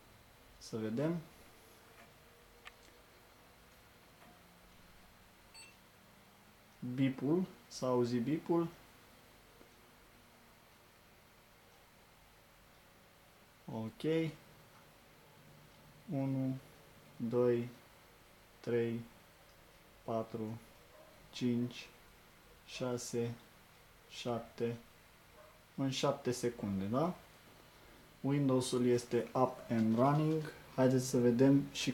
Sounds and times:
Speech: 0:00.6 - 0:01.3, 0:06.8 - 0:08.8, 0:13.7 - 0:14.4, 0:16.1 - 0:17.8, 0:18.6 - 0:19.1, 0:20.1 - 0:20.7, 0:21.3 - 0:22.0, 0:22.7 - 0:23.5, 0:24.1 - 0:24.9, 0:25.8 - 0:27.2, 0:28.2 - 0:31.9.

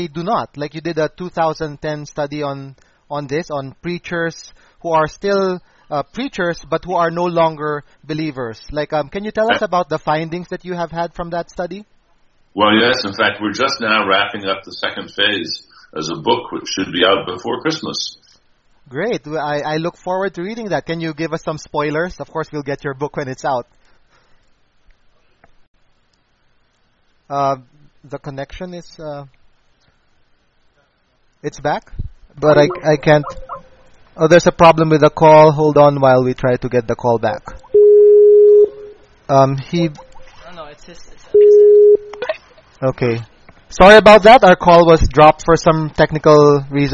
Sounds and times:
Male speech, man speaking: 0:00.0 - 0:11.9, 0:12.6 - 0:23.7, 0:27.3 - 0:29.4, 0:31.4 - 0:33.4, 0:34.2 - 0:37.6, 0:39.3 - 0:40.0, 0:42.8 - 0:46.9
Conversation: 0:00.0 - 0:25.4, 0:26.7 - 0:46.9.

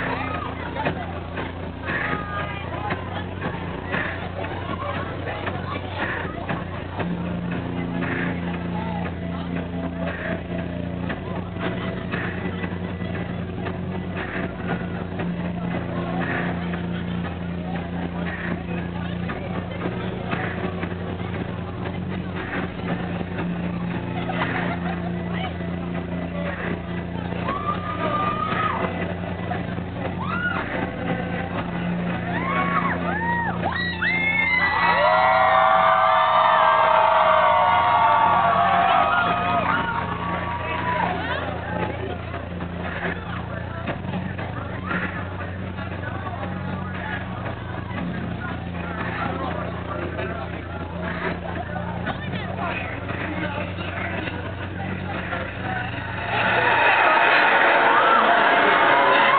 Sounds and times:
Music: 0:00.0 - 0:59.3
Speech: 0:00.0 - 0:59.3.

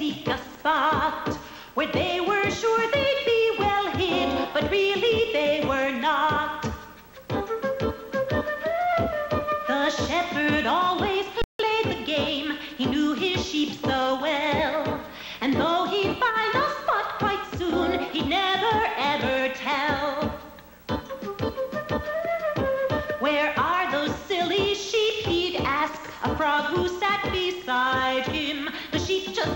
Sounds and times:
Music: 0:00.0 - 0:29.5.

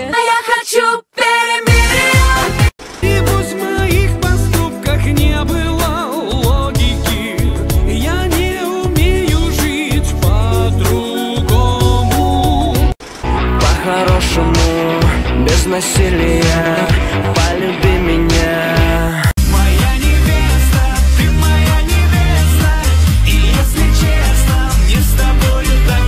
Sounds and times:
Music: 0:01.7 - 0:26.0.

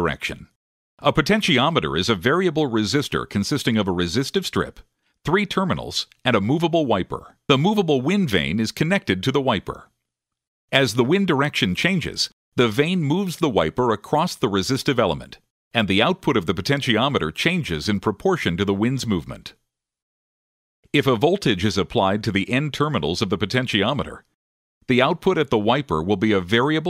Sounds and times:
Speech: 0:00.0 - 0:09.9, 0:10.7 - 0:19.6, 0:20.9 - 0:24.3, 0:24.9 - 0:26.9.

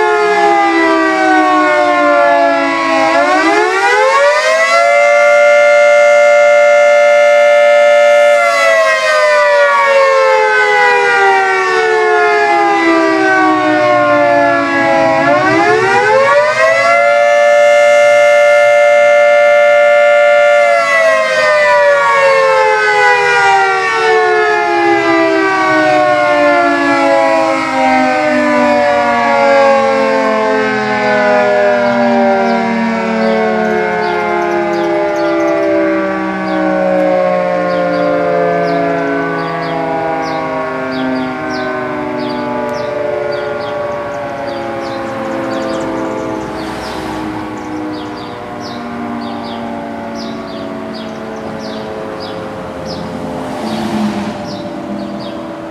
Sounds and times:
Civil defense siren: 0:00.0 - 0:55.7.

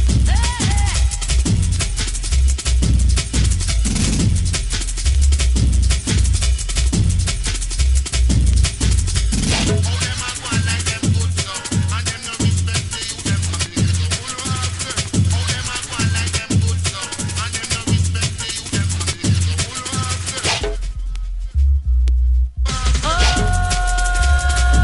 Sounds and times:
Drum and bass: 0:00.0 - 0:24.8.

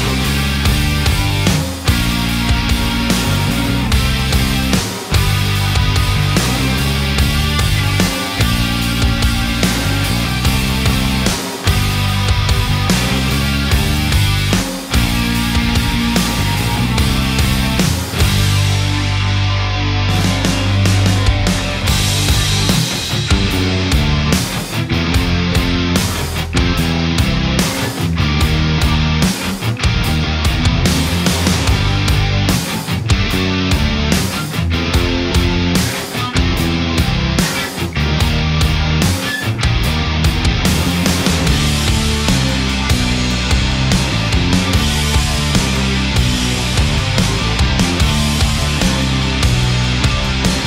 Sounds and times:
Bass guitar: 0:00.0 - 0:50.6
Electric guitar: 0:00.0 - 0:50.6.

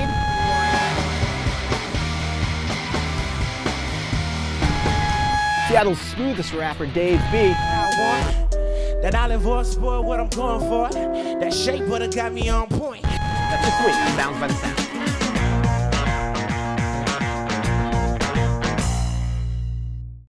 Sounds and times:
Music: 0:00.0 - 0:20.3
Speech: 0:05.7 - 0:08.2, 0:11.5 - 0:14.8.

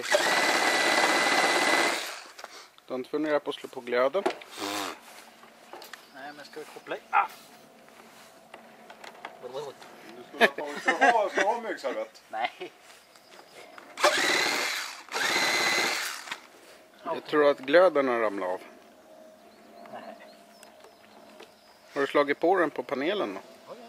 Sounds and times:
Outside, rural or natural: 0:00.0 - 0:23.8.

